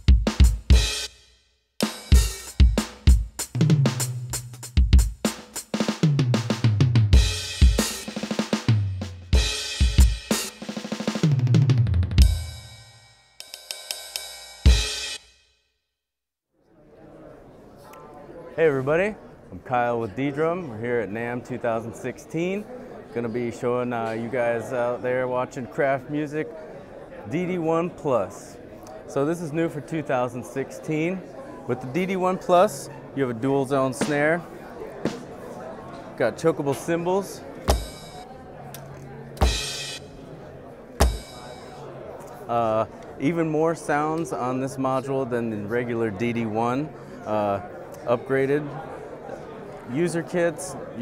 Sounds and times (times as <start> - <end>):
Bass drum: 0.0 - 1.0, 1.8 - 12.8, 37.7 - 38.2, 39.4 - 40.0, 41.0 - 41.7
Drum kit: 0.0 - 1.2, 1.8 - 15.3, 34.0 - 34.3, 35.0 - 35.3, 37.6 - 40.1, 41.0 - 41.8
Speech: 16.7 - 37.7, 41.6 - 51.0.